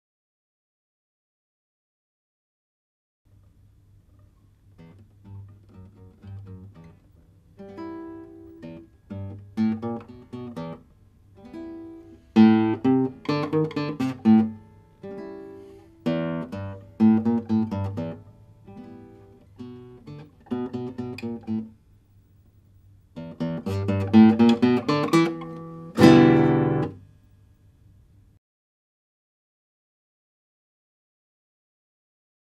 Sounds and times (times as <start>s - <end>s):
Strum: 23.2s - 27.0s.